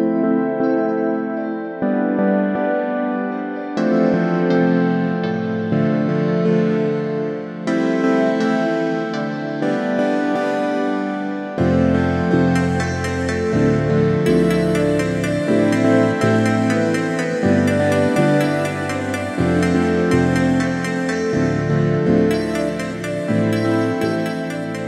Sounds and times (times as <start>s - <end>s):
Music: 0.0s - 24.8s.